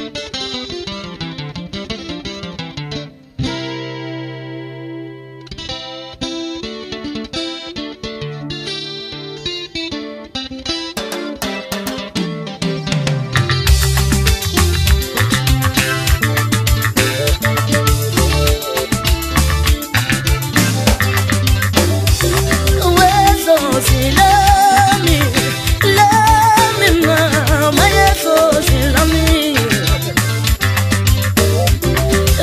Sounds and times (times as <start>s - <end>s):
Music: 0.0s - 32.4s.